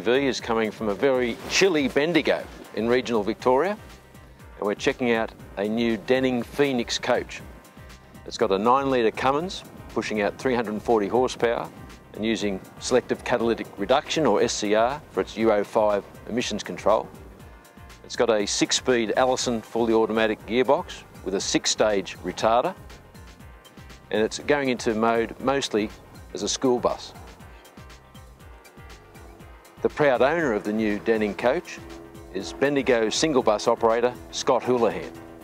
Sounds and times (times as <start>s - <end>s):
Speech: 0.0s - 3.8s, 4.6s - 7.4s, 8.3s - 17.1s, 18.1s - 22.8s, 24.1s - 27.2s, 29.8s - 31.8s, 32.4s - 35.1s
Music: 0.0s - 35.4s.